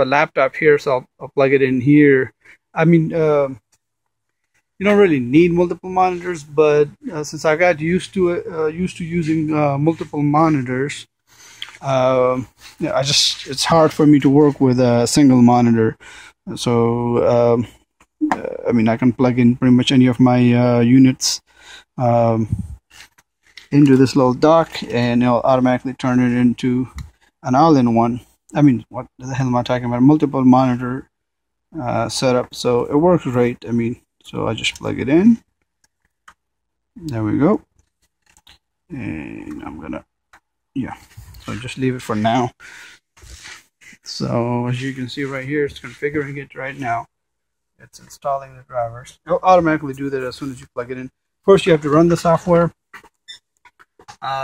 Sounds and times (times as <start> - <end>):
Speech: 0.0 - 3.6, 4.8 - 22.8, 23.6 - 31.1, 31.8 - 35.4, 37.0 - 37.7, 38.9 - 40.1, 40.8 - 42.6, 43.8 - 47.1, 47.8 - 52.8, 54.1 - 54.4.